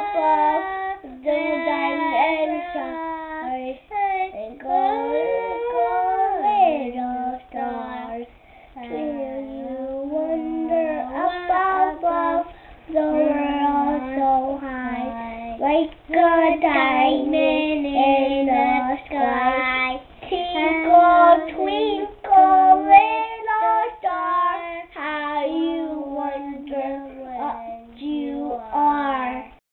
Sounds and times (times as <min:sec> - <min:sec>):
Child singing: 0:00.0 - 0:29.6.